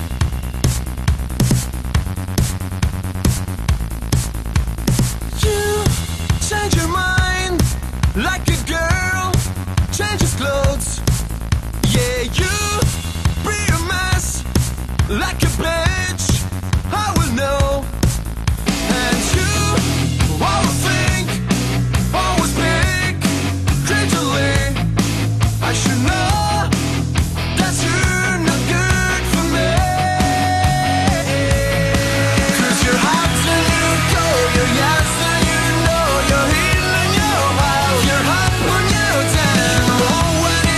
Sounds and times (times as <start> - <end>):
Music: 0.0 - 40.7.